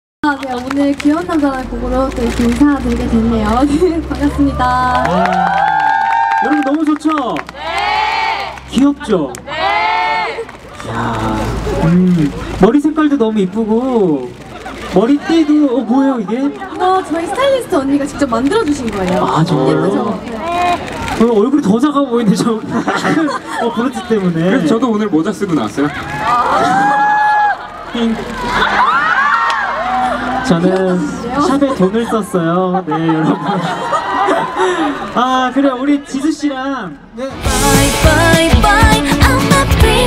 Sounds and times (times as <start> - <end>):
Music: 37.4 - 40.0.